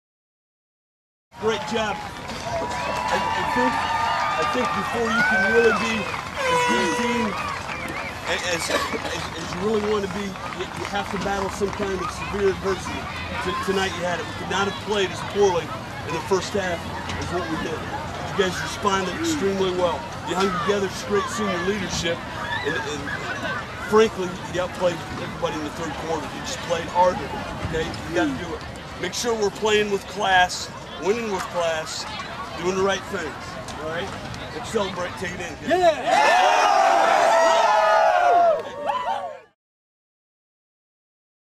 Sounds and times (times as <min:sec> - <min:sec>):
Male speech, man speaking: 0:01.4 - 0:02.0, 0:03.0 - 0:07.4, 0:08.3 - 0:36.2.